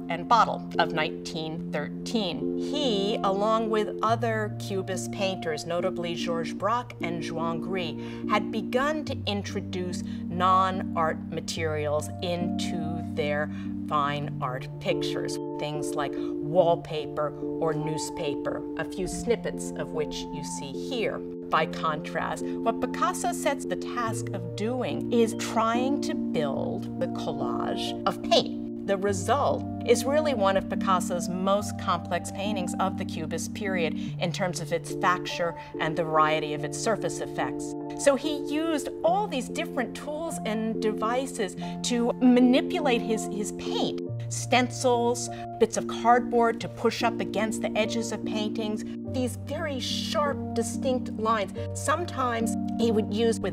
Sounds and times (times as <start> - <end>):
Speech: 0.0 - 53.5.